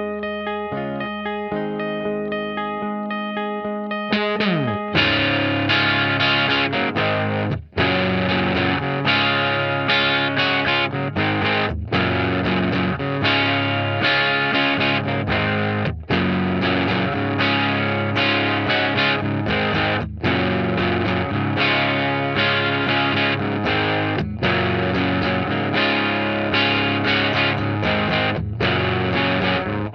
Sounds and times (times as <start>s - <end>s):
Electric guitar: 0.0s - 29.9s
Strum: 4.1s - 29.9s.